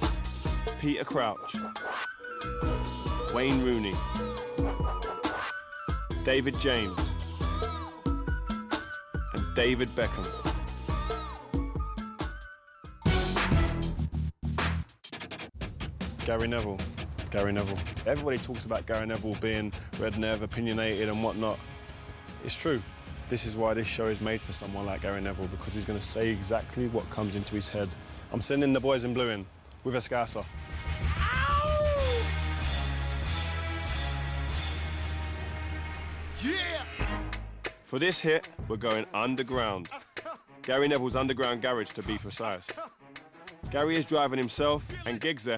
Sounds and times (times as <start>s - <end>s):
Music: 0.0s - 29.3s, 30.0s - 45.5s
Speech: 0.8s - 1.5s, 3.3s - 4.0s, 6.2s - 7.0s, 9.4s - 10.3s, 16.2s - 21.6s, 22.4s - 30.5s, 37.9s - 40.0s, 40.7s - 42.8s, 43.7s - 45.5s.